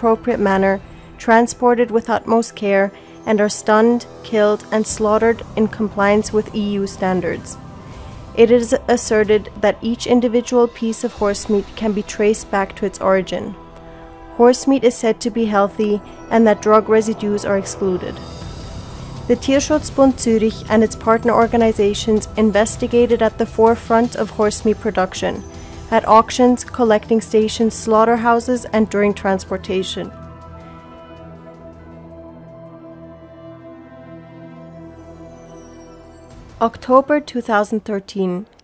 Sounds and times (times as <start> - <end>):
Speech: 0.0 - 7.6, 8.4 - 13.6, 14.4 - 18.2, 19.3 - 30.1, 36.6 - 38.5
Music: 0.0 - 38.6.